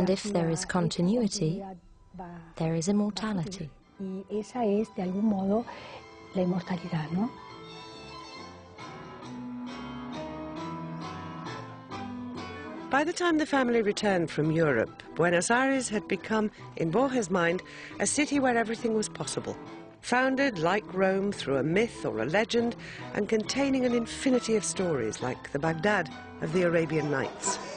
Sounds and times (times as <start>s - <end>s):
Speech: 0.0s - 5.6s, 13.0s - 27.7s.